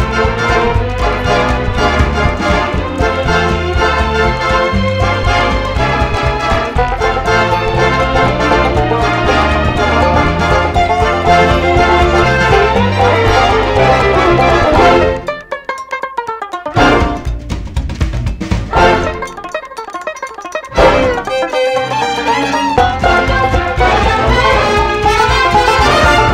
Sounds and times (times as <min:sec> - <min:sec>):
Country: 0:18.7 - 0:26.3.